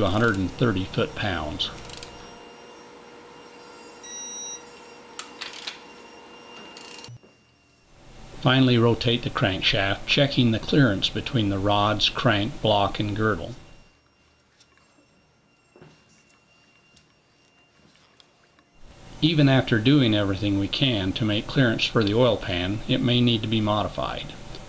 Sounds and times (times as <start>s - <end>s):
Speech: 0.0s - 1.8s, 8.4s - 13.6s, 19.2s - 24.4s.